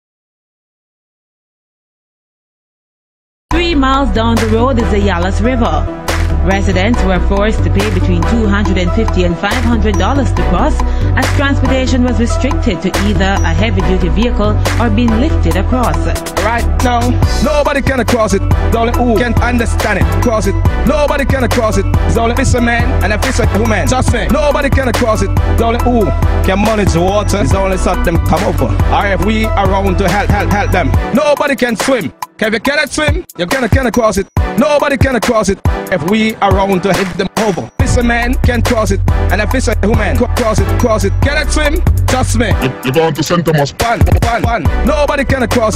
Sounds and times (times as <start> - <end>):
Music: 3.5 - 45.7.